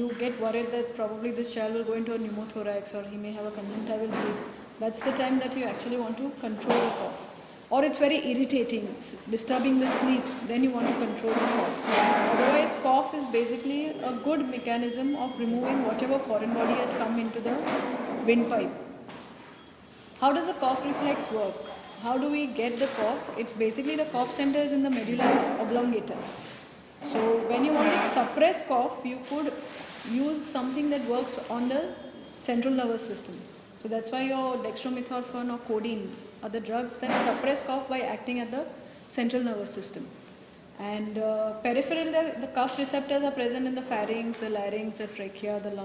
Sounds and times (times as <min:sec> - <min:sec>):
Speech: 0:00.0 - 0:17.6, 0:18.2 - 0:18.8, 0:20.2 - 0:26.3, 0:27.0 - 0:40.2, 0:40.8 - 0:45.8.